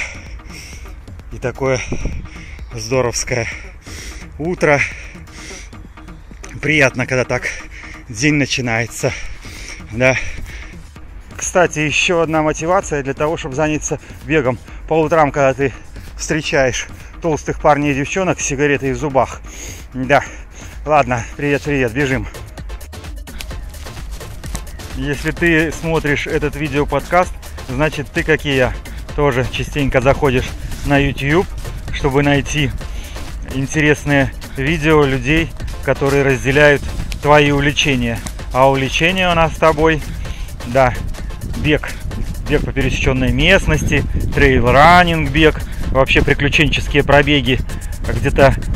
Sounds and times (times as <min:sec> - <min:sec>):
Music: 0:00.0 - 0:48.7
Speech: 0:01.3 - 0:01.9, 0:02.7 - 0:03.6, 0:04.4 - 0:04.9, 0:06.5 - 0:09.2, 0:09.9 - 0:10.3, 0:11.4 - 0:19.4, 0:20.0 - 0:20.3, 0:20.9 - 0:22.4, 0:25.0 - 0:32.8, 0:33.4 - 0:40.0, 0:40.6 - 0:41.0, 0:41.6 - 0:48.6.